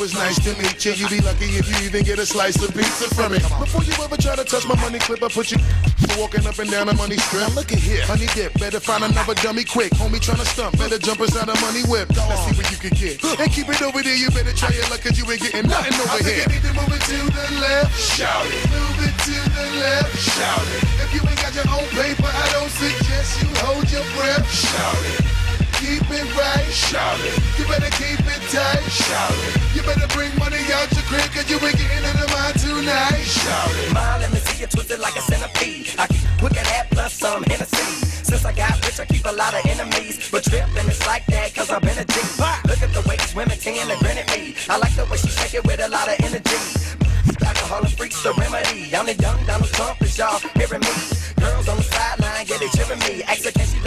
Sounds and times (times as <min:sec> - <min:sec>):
Music: 0:00.0 - 0:53.8
Rapping: 0:00.0 - 0:53.8.